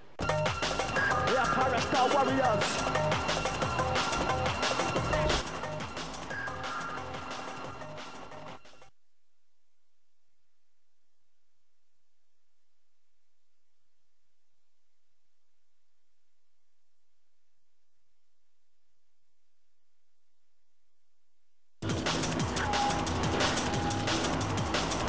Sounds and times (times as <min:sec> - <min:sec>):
Music: 0:00.2 - 0:08.9, 0:21.8 - 0:25.0.